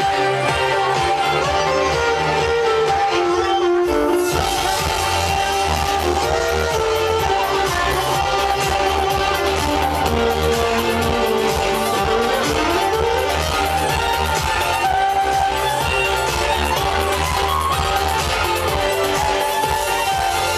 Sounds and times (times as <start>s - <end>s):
Violin, fiddle: 0.0s - 20.5s.